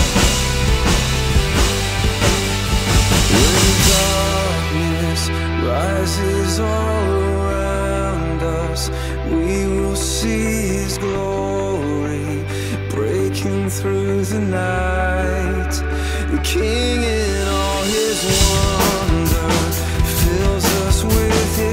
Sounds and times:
Drum: 0.0s - 4.6s, 17.7s - 21.7s
Drum kit: 0.0s - 5.4s, 17.4s - 21.7s
Sad music: 0.0s - 21.7s.

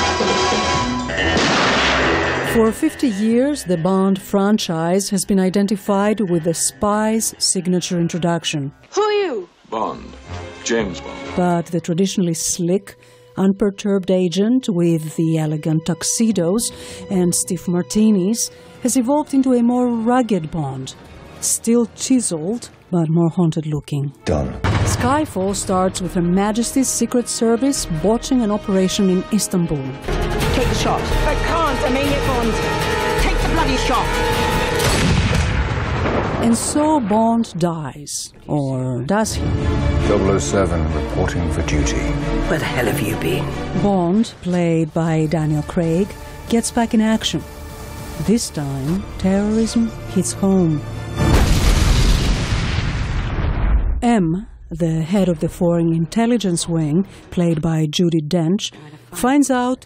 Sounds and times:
Music: 0.0s - 35.6s, 37.9s - 52.3s, 54.7s - 59.8s
Speech: 2.6s - 30.0s, 36.4s - 39.4s, 40.2s - 47.4s, 54.0s - 59.8s.

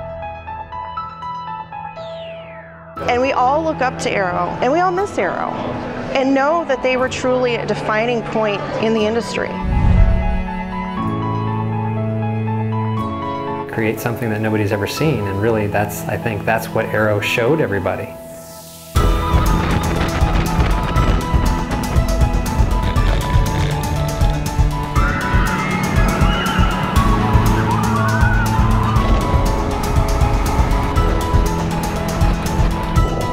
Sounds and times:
Music: 0.0s - 33.3s
Speech: 6.2s - 9.6s, 13.7s - 18.2s.

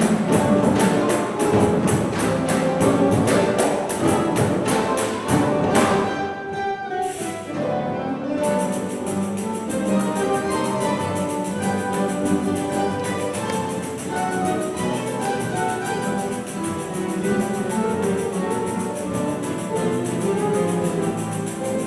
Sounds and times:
Acoustic guitar: 0.0s - 21.8s
Orchestra: 0.0s - 21.8s.

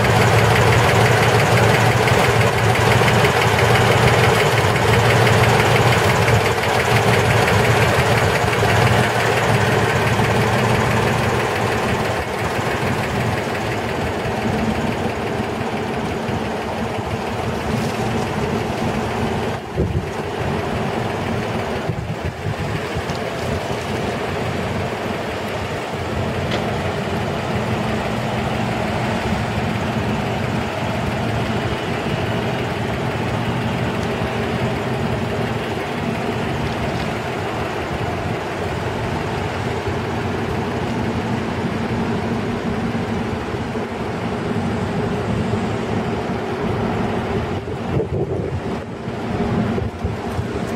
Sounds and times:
Vehicle: 0.0s - 50.7s.

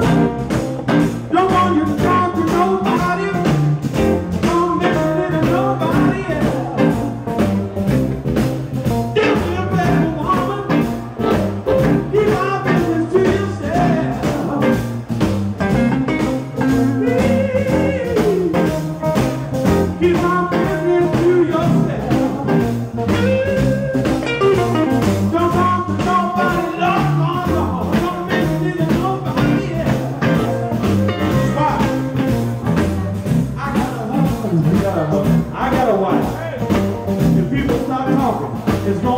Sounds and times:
Blues: 0.0s - 39.1s
Guitar: 0.0s - 39.1s.

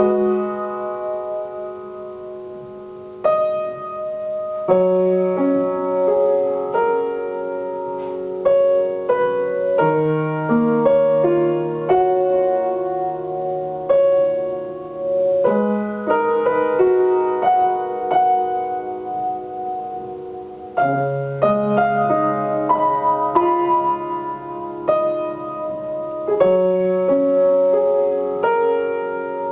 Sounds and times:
Music: 0.0s - 29.5s.

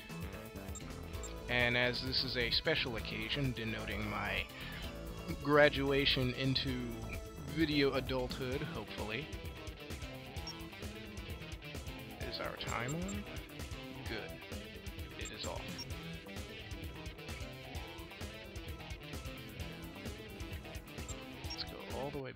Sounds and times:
Music: 0.0s - 22.3s
Speech: 1.5s - 4.5s, 5.3s - 9.3s, 12.2s - 13.2s, 14.0s - 14.3s, 15.2s - 15.7s, 21.6s - 22.3s.

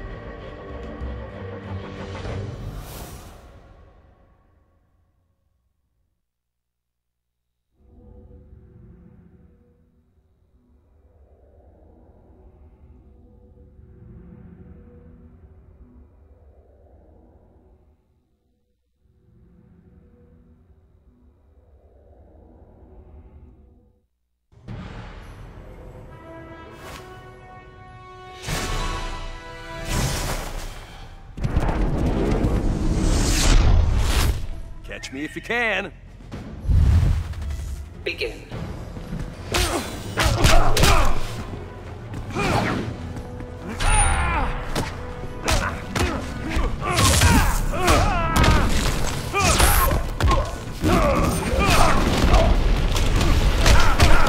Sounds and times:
Music: 0.0s - 5.6s, 7.7s - 32.8s, 33.6s - 54.2s.

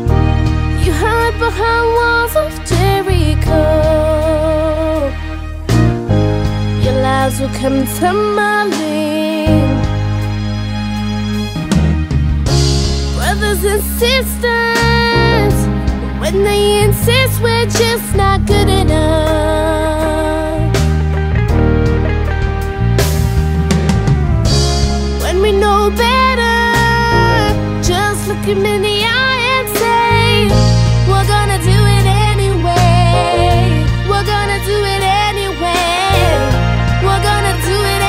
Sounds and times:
Music: 0.0s - 38.0s.

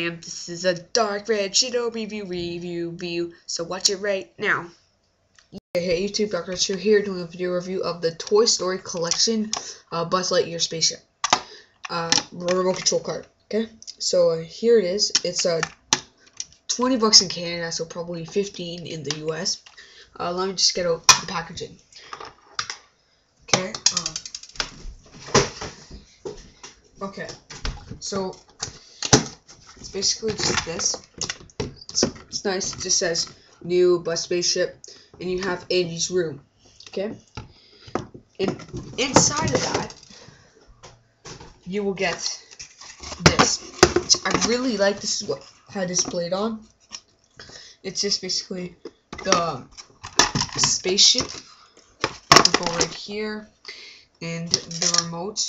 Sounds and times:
Speech: 0.0s - 4.8s, 5.8s - 11.1s, 11.9s - 15.7s, 16.7s - 19.6s, 20.2s - 21.8s, 23.5s - 24.3s, 27.0s - 27.4s, 28.0s - 28.5s, 29.8s - 31.0s, 31.9s - 37.2s, 38.4s - 40.0s, 41.7s - 46.7s, 47.9s - 49.7s, 50.6s - 51.4s, 52.4s - 53.5s, 54.2s - 55.4s.

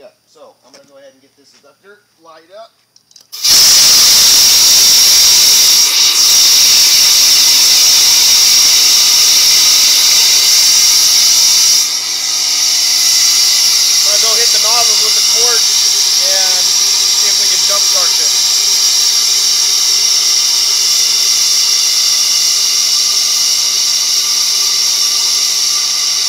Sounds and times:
Hiss: 3.3s - 26.2s.

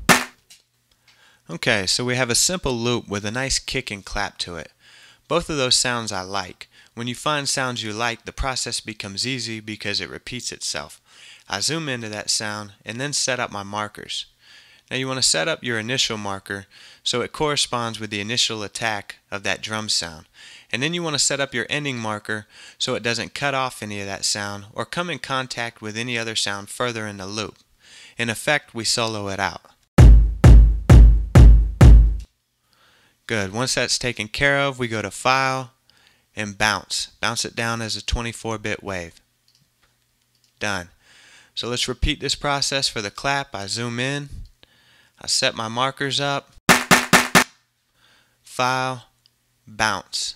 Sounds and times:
Speech: 1.5s - 27.6s, 28.2s - 29.8s, 33.3s - 35.8s, 36.4s - 39.3s, 40.6s - 41.0s, 41.6s - 44.5s, 45.2s - 46.6s, 48.5s - 50.3s.

